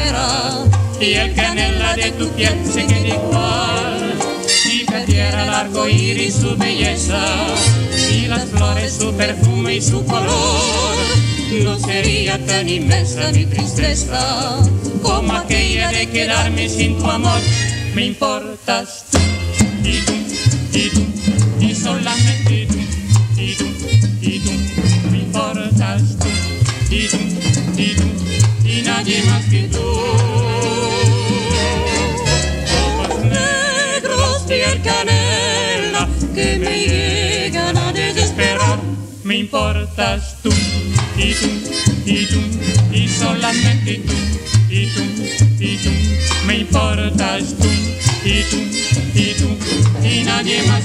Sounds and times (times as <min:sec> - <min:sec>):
Music of Latin America: 0:00.0 - 0:50.8.